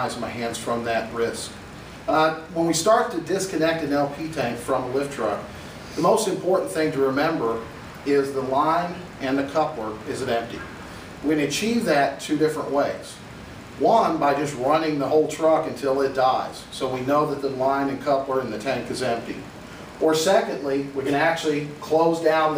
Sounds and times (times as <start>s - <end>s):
Speech: 0.0s - 13.2s, 13.8s - 22.5s.